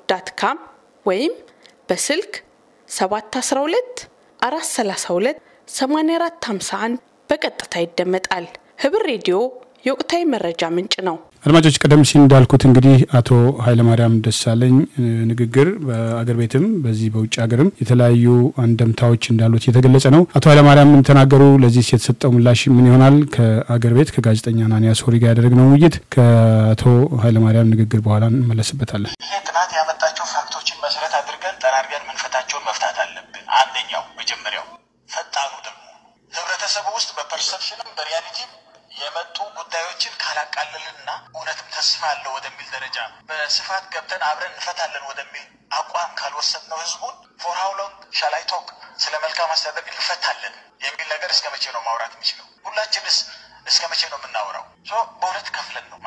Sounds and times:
Speech: 0.1 - 56.0.

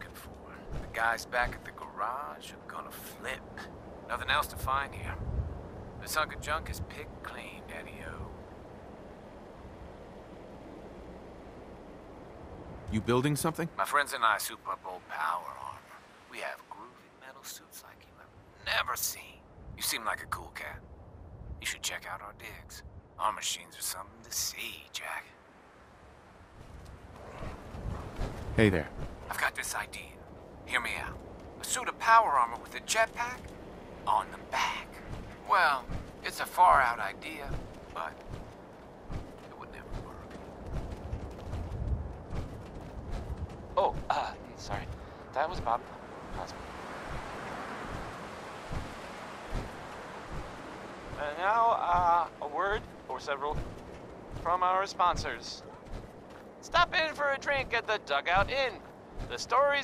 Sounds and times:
Speech: 0.9 - 5.2, 6.0 - 8.3, 12.9 - 20.8, 21.6 - 25.3, 28.6 - 33.4, 34.1 - 38.2, 43.8 - 46.6, 51.2 - 53.6, 54.4 - 55.7, 56.6 - 59.8.

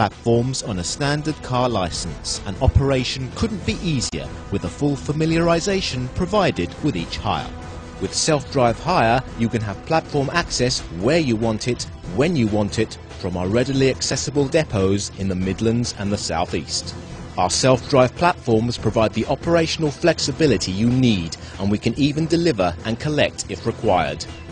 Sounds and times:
Speech: 0.0 - 24.3
Music: 0.0 - 24.5.

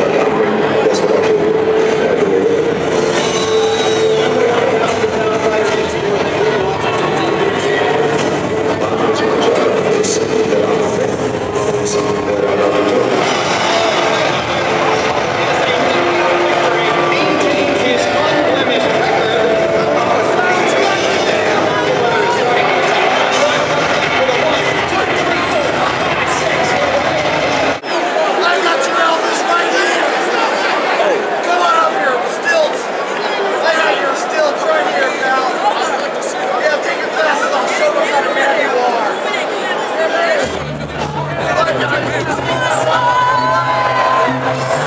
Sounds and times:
Music: 0.0 - 27.8, 40.4 - 44.8
Speech: 0.0 - 44.8.

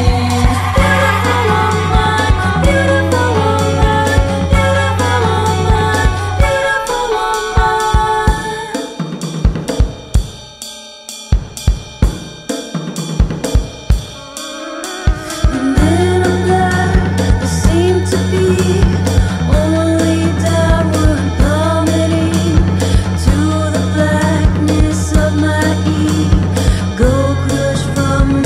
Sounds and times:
Drum roll: 0.0 - 10.6, 11.3 - 28.4.

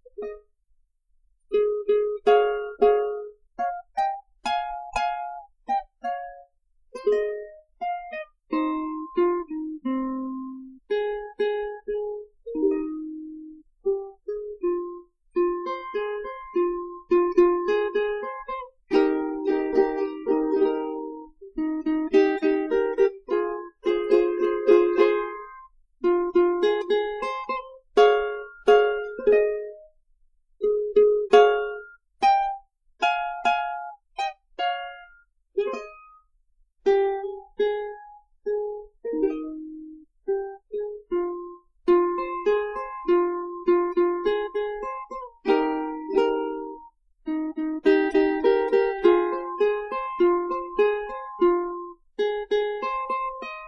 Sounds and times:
Music: 0.0 - 0.6, 1.4 - 30.0, 30.6 - 53.6.

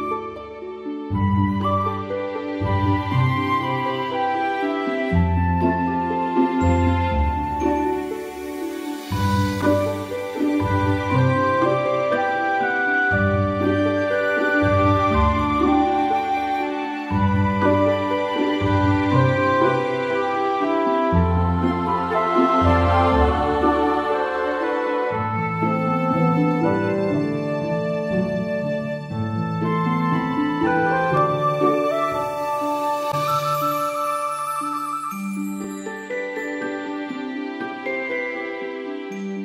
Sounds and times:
Music: 0.0 - 39.4.

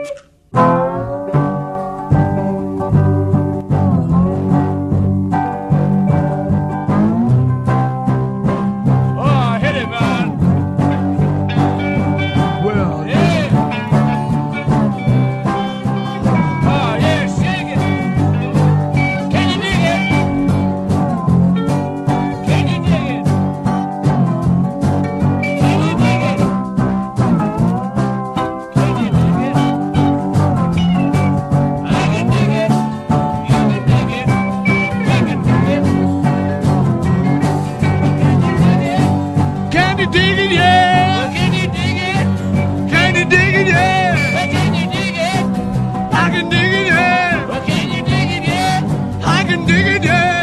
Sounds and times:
Music: 0.0 - 50.4
Speech: 9.2 - 10.3, 12.4 - 13.6, 22.4 - 23.2, 46.2 - 50.4.

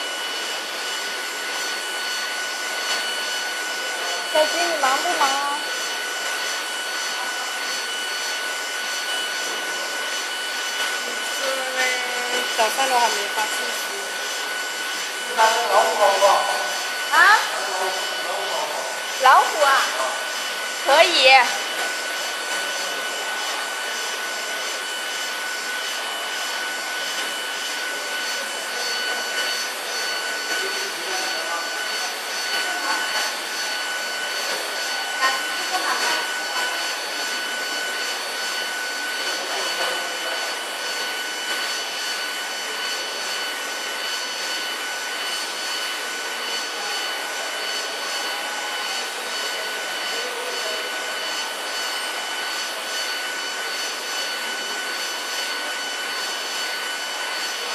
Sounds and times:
Printer: 0.0 - 57.7
Speech: 4.4 - 5.6, 15.3 - 20.2, 20.9 - 21.6, 49.5 - 51.0.

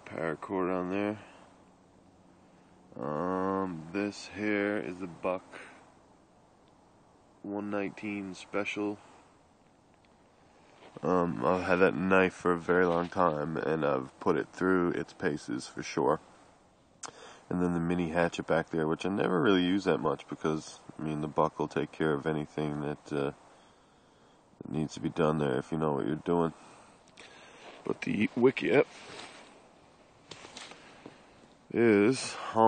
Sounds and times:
Speech: 0.0 - 1.4, 2.9 - 5.7, 7.4 - 9.1, 11.0 - 16.3, 17.5 - 23.4, 24.6 - 26.6, 27.8 - 29.0, 31.7 - 32.6.

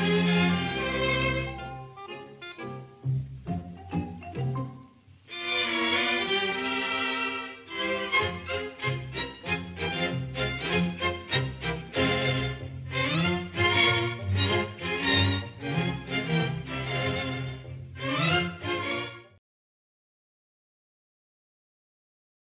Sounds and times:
Music: 0.0 - 19.4.

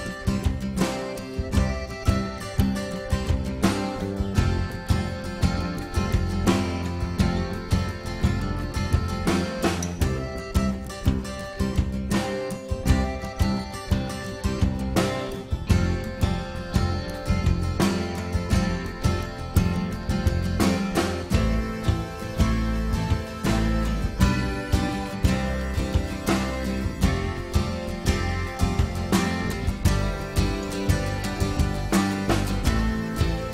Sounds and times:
Music: 0.0 - 33.5.

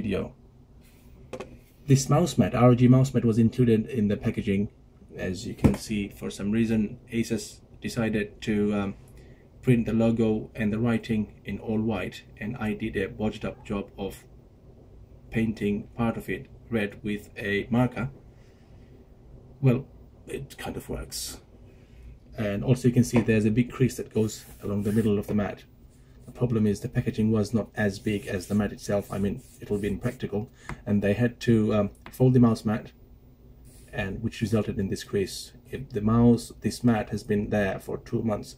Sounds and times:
Speech: 0.0 - 0.4, 1.9 - 9.0, 9.6 - 14.3, 15.3 - 18.2, 19.6 - 21.5, 22.4 - 25.7, 26.3 - 33.0, 33.9 - 38.5.

